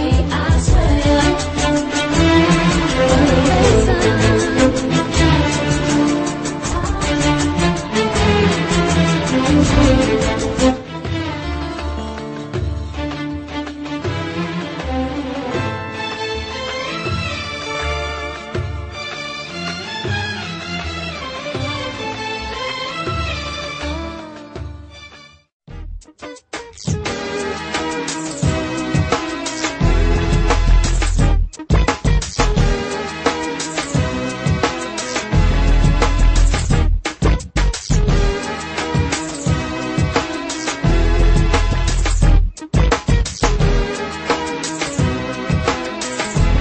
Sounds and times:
Music: 0.0 - 46.6.

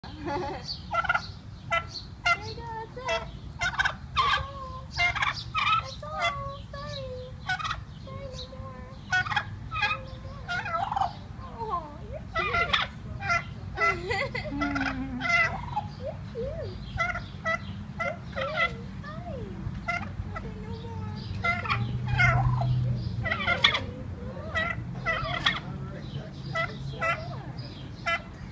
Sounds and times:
Gobble: 0.9 - 2.4, 3.1 - 4.4, 5.0 - 6.4, 7.4 - 7.8, 9.1 - 11.2, 12.3 - 14.0, 14.6 - 15.9, 17.0 - 18.8, 19.8 - 20.2, 21.4 - 23.9, 24.5 - 25.7, 26.5 - 27.3, 28.0 - 28.3.

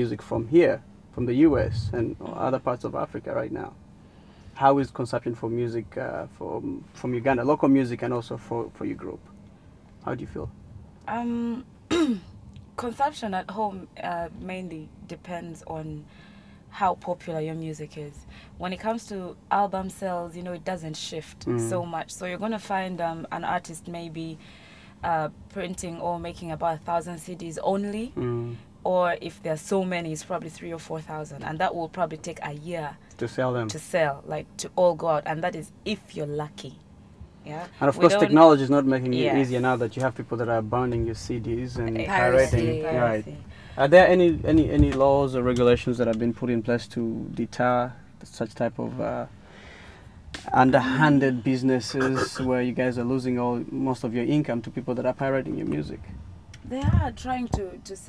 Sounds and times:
Speech: 18.7 - 24.3, 25.1 - 36.7, 37.5 - 47.8, 50.5 - 56.0, 56.7 - 58.0.

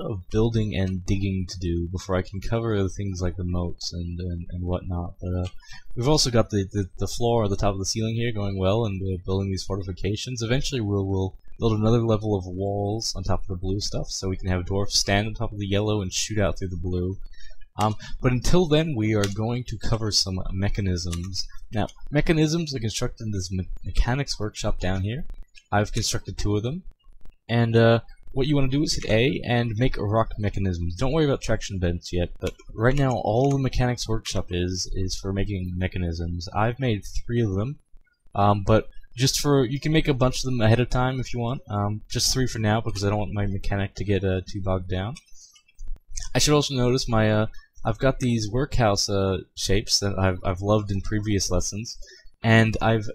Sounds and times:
Speech: 0.0 - 26.8, 27.5 - 37.8, 38.4 - 45.4, 46.2 - 53.1.

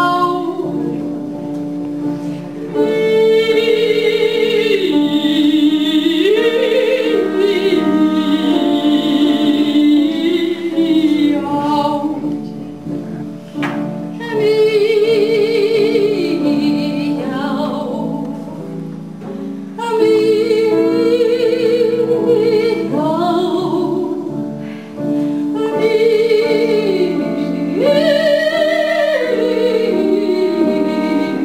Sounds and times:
Music: 0.0 - 31.4.

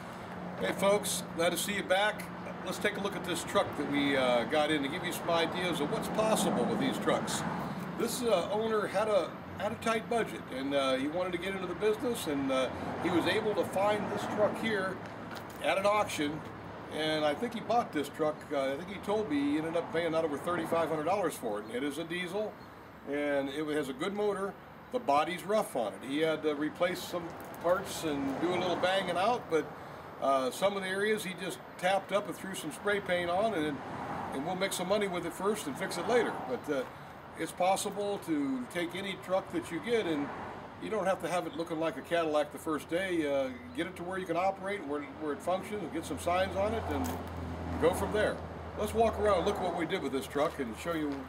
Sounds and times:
Speech: 0.6 - 15.0, 15.6 - 22.5, 23.1 - 47.2, 47.8 - 51.2.

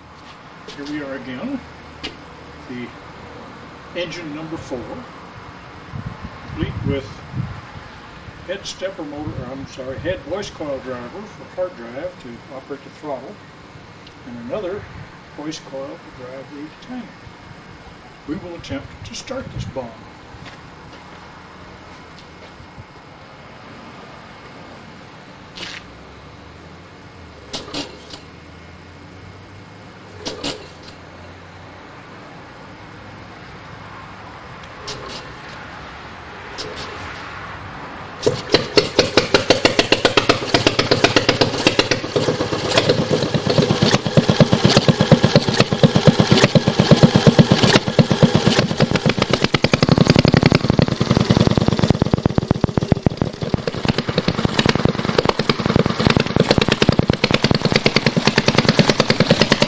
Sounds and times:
Medium engine (mid frequency): 0.0 - 59.6
Engine starting: 27.5 - 28.3, 30.2 - 31.0, 34.8 - 35.4, 36.6 - 37.1, 38.2 - 59.6.

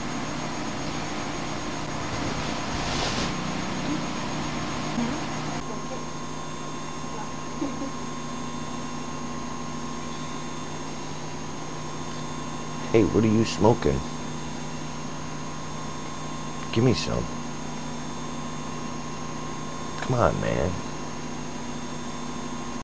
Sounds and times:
Speech: 12.9 - 14.1, 16.7 - 17.3, 20.0 - 20.8.

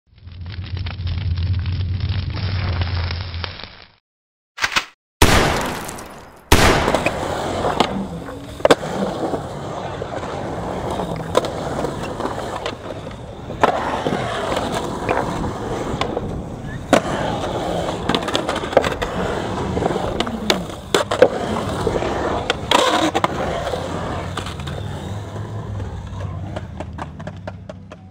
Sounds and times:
Outside, urban or manmade: 0.1 - 4.0, 4.6 - 28.1
Skateboard: 6.9 - 28.1.

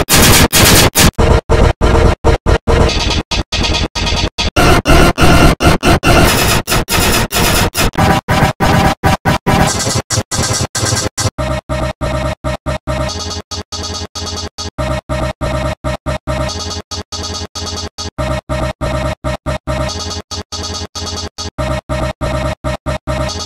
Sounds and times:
Music: 2.7 - 23.4.

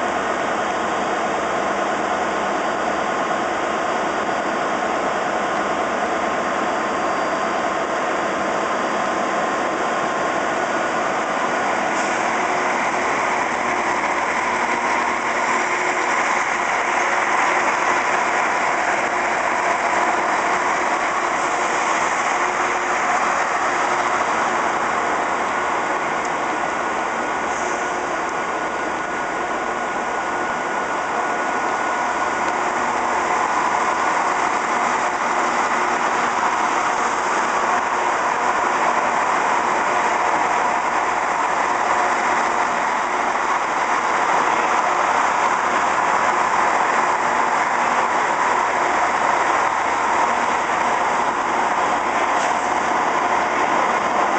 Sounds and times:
Outside, urban or manmade: 0.0 - 54.3
Railroad car, train wagon: 0.0 - 54.3
Train: 0.0 - 54.3.

